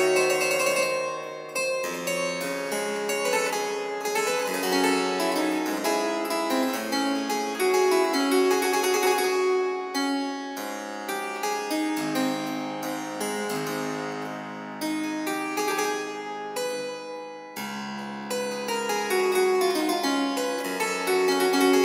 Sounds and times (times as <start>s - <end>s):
Harpsichord: 0.0s - 21.8s.